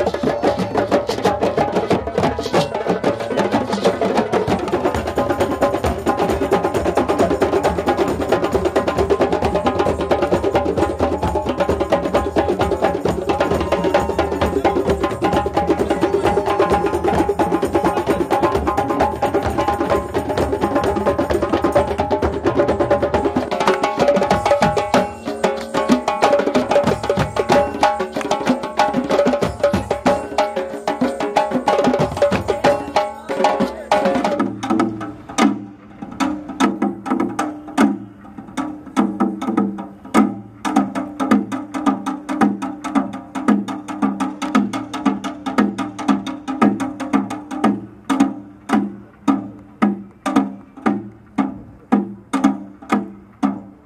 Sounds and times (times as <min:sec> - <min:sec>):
Percussion: 0:00.0 - 0:53.8.